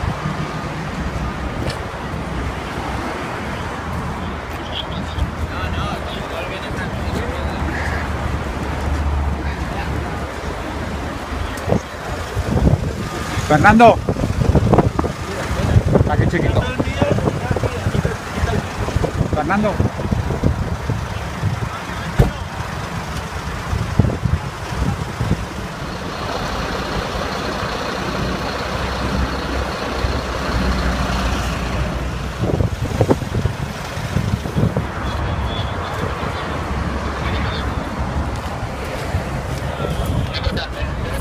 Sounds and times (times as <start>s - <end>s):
Traffic noise, roadway noise: 0.0s - 41.2s
Truck: 0.0s - 41.2s.